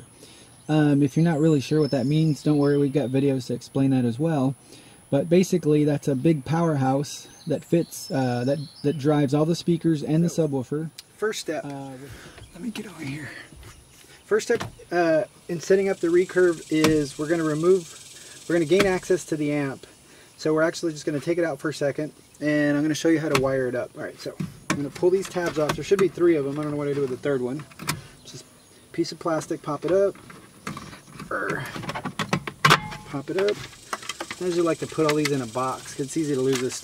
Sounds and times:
Outside, rural or natural: 0:00.0 - 0:36.8
Speech: 0:00.7 - 0:13.5, 0:14.3 - 0:27.7, 0:28.3 - 0:30.2, 0:31.3 - 0:31.8, 0:33.1 - 0:33.6, 0:34.4 - 0:36.8.

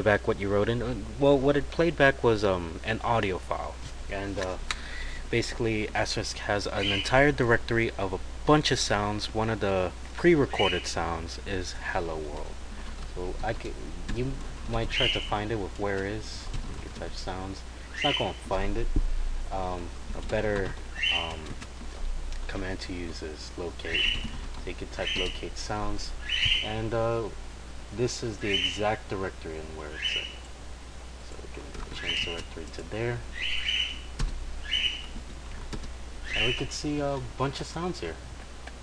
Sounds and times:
Speech: 0:00.0 - 0:12.6, 0:13.2 - 0:18.9, 0:19.5 - 0:21.6, 0:22.4 - 0:30.4, 0:31.2 - 0:33.3, 0:36.3 - 0:38.2.

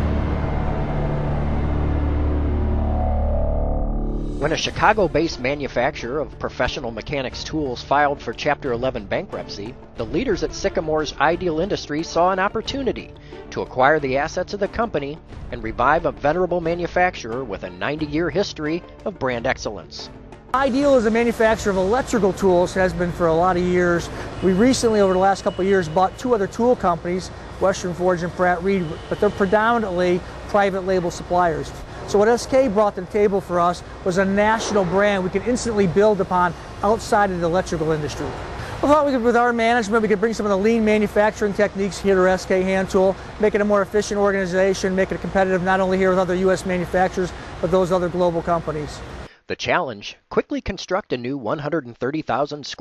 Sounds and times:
Speech: 0:04.4 - 0:52.8.

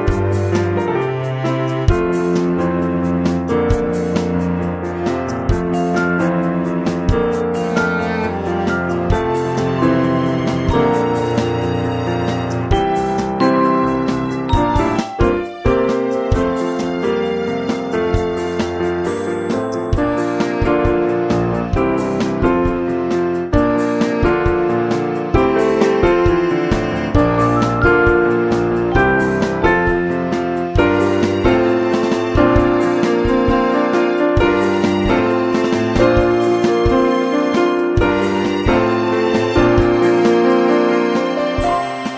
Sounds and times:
Music: 0:00.0 - 0:42.1.

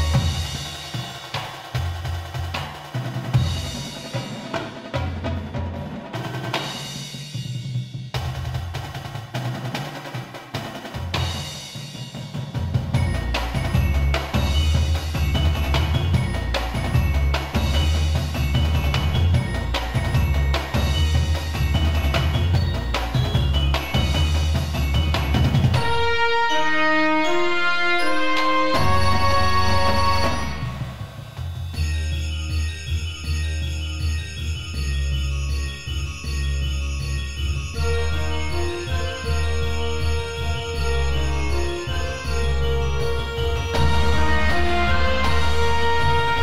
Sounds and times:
Electronic music: 0:25.1 - 0:33.3.

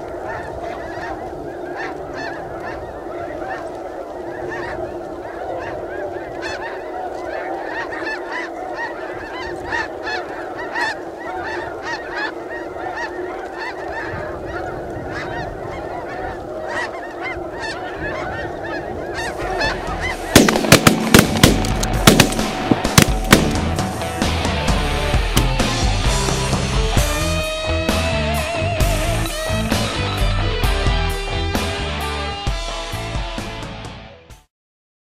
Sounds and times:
Honk: 0:00.0 - 0:24.0.

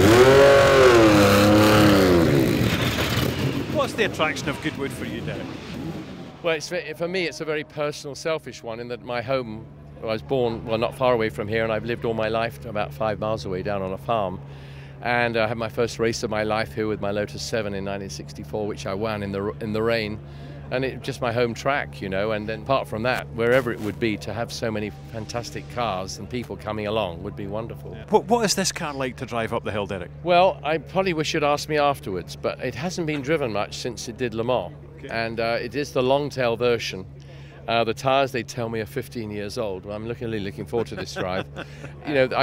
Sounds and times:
Speech: 0:03.8 - 0:05.4, 0:06.4 - 0:14.4, 0:15.0 - 0:37.1, 0:37.7 - 0:42.4.

